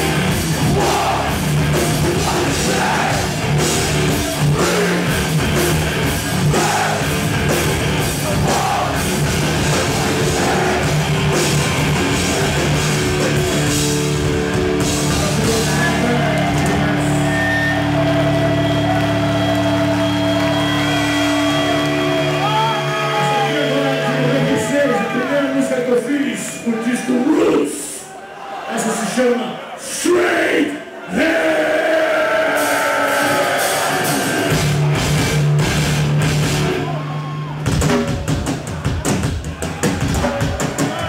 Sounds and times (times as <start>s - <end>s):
Music: 0.0s - 26.6s, 32.0s - 41.0s.